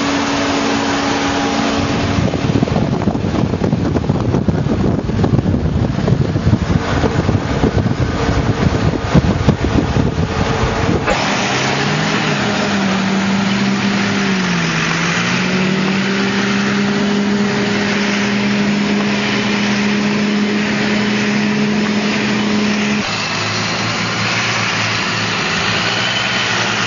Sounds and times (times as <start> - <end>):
Truck: 0.0 - 26.8.